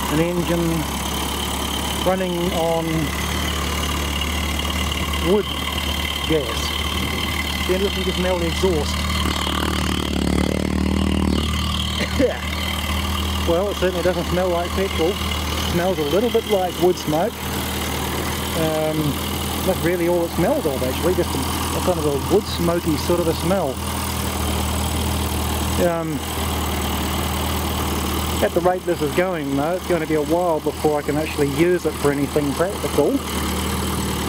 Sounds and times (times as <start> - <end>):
Idling: 0.0 - 34.2.